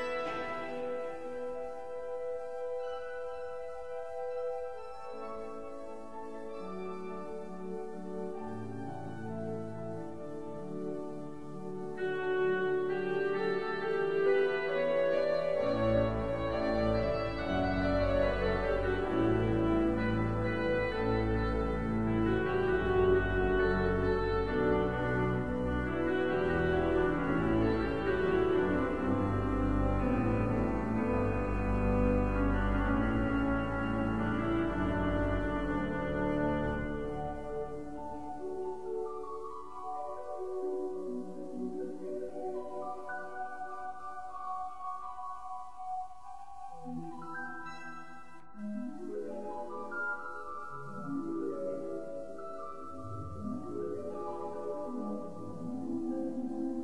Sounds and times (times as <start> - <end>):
Music: 0.0 - 56.8.